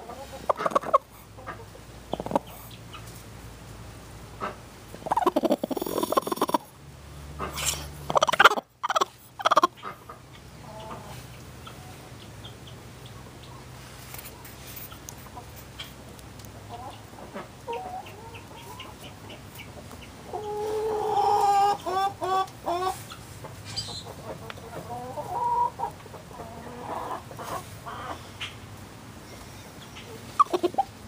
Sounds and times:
Cluck: 0:00.0 - 0:03.2, 0:04.4 - 0:06.7, 0:07.4 - 0:13.7, 0:16.7 - 0:28.6, 0:29.8 - 0:31.0.

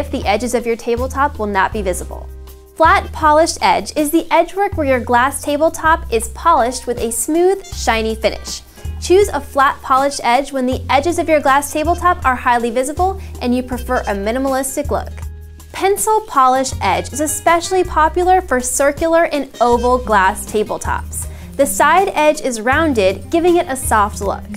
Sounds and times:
Speech: 0:00.0 - 0:15.2, 0:15.8 - 0:24.5
Music: 0:00.0 - 0:24.5.

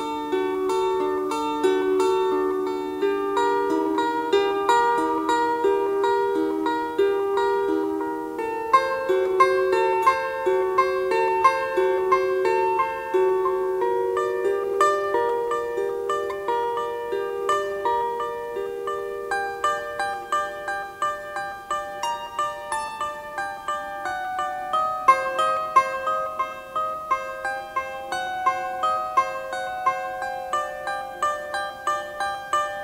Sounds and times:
Flamenco: 0:00.0 - 0:32.8.

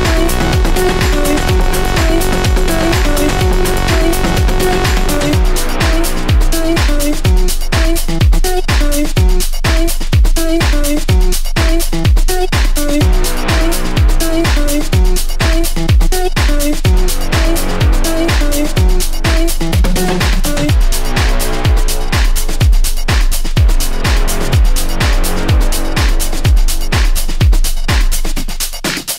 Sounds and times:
Disco: 0:00.0 - 0:29.1.

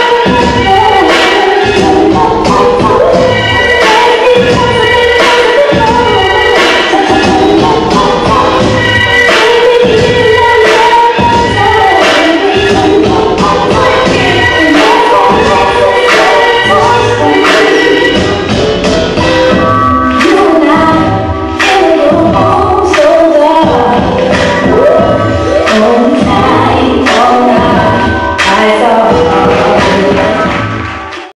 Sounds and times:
Music: 0:00.0 - 0:31.3.

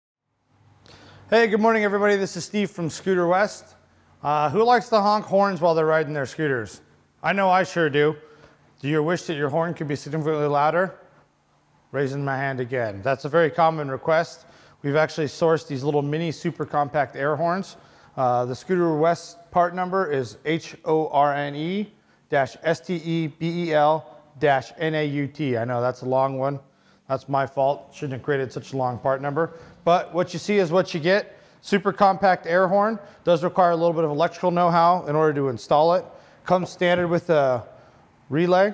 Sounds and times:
Speech: 0:01.3 - 0:11.1, 0:11.9 - 0:37.7, 0:38.3 - 0:38.7.

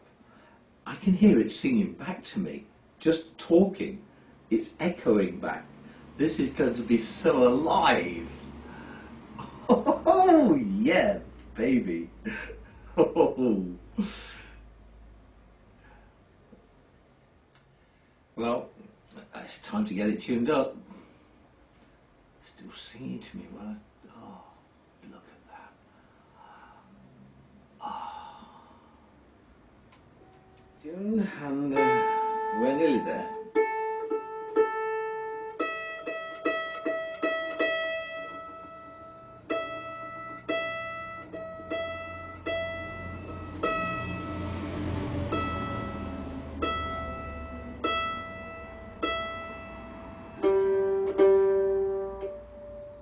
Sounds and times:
Guitar: 0:30.0 - 0:53.0
Mandolin: 0:31.4 - 0:53.0
Ukulele: 0:31.7 - 0:44.2, 0:45.2 - 0:53.0.

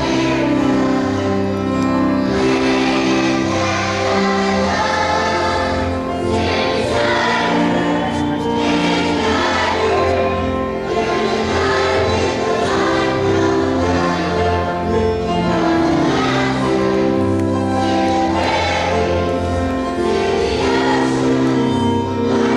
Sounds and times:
Choir: 0:00.0 - 0:22.5.

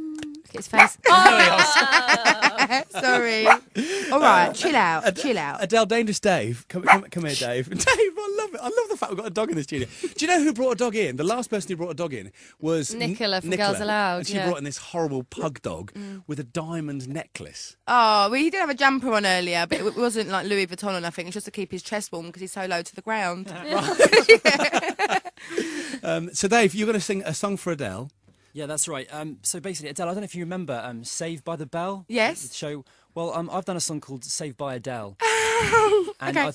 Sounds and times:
Speech: 0:00.0 - 0:24.7, 0:26.0 - 0:35.1, 0:35.7 - 0:36.5.

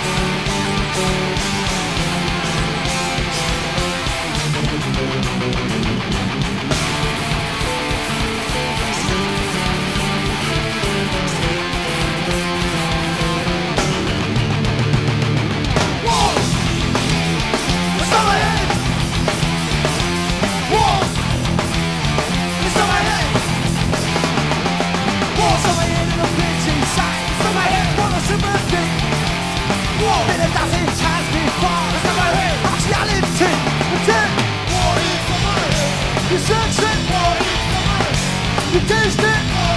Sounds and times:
Music: 0:00.0 - 0:39.7.

